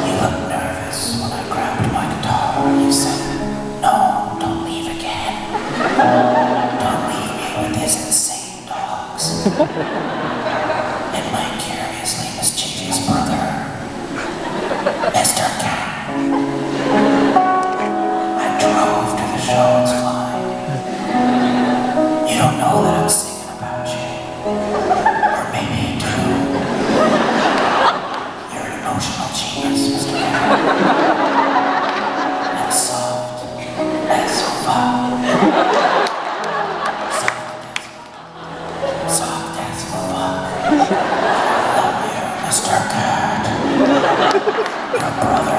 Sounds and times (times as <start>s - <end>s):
Music: 0.0s - 45.5s.